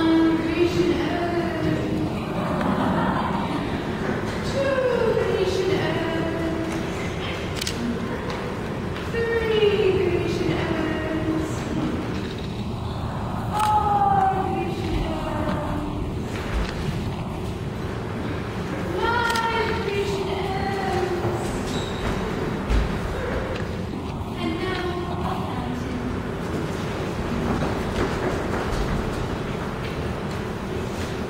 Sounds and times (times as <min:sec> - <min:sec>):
Speech: 0:00.0 - 0:08.2, 0:09.1 - 0:11.9, 0:13.5 - 0:16.0, 0:18.9 - 0:21.7, 0:24.4 - 0:26.2.